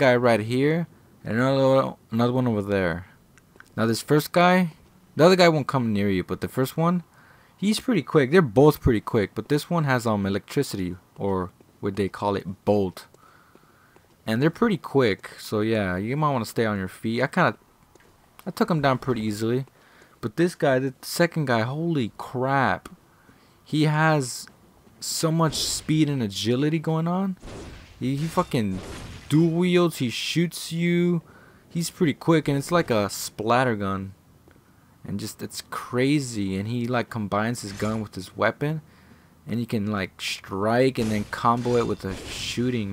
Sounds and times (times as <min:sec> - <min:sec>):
Speech: 0:00.0 - 0:03.2, 0:03.8 - 0:13.1, 0:14.3 - 0:17.6, 0:18.4 - 0:23.0, 0:23.7 - 0:27.4, 0:28.0 - 0:34.2, 0:35.0 - 0:38.8, 0:39.5 - 0:42.9.